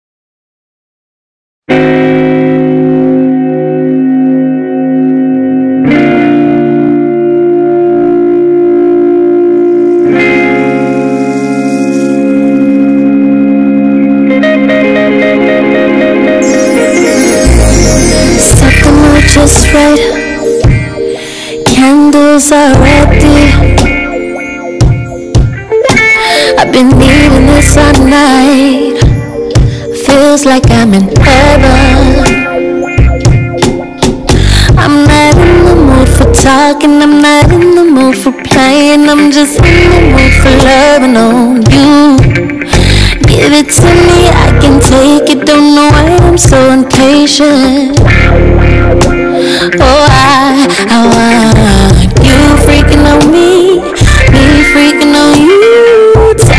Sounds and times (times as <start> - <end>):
Music: 1.7 - 56.5.